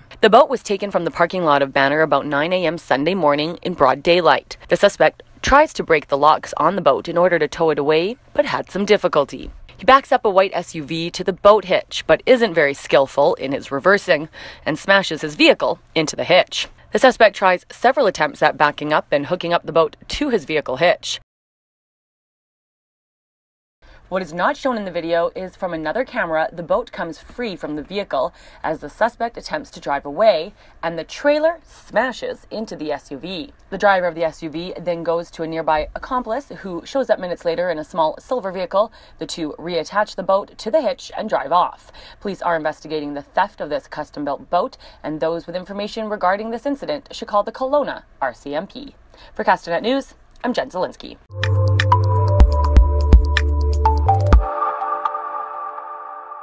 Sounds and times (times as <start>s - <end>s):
Speech: 0.2s - 21.2s, 24.1s - 51.3s.